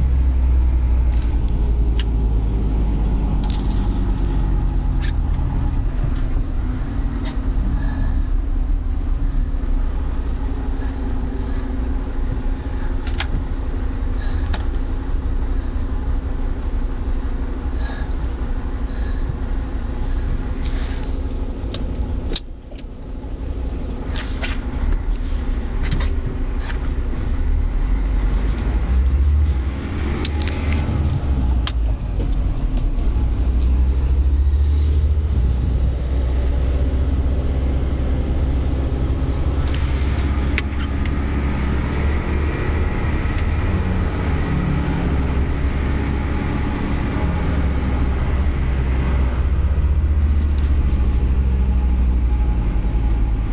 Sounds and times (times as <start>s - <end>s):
Vehicle: 0.0s - 53.5s.